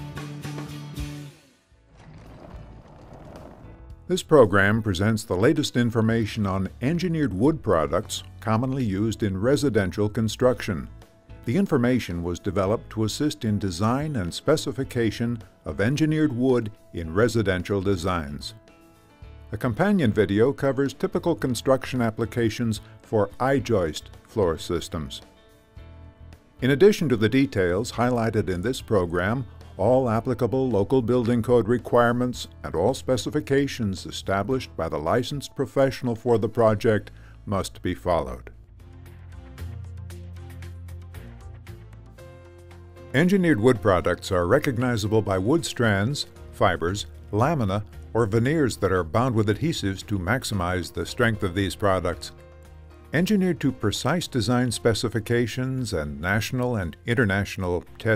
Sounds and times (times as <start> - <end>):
Music: 0.0 - 58.1
Speech: 4.1 - 10.9, 11.5 - 18.6, 19.6 - 25.3, 26.6 - 38.6, 43.2 - 52.4, 53.2 - 58.1.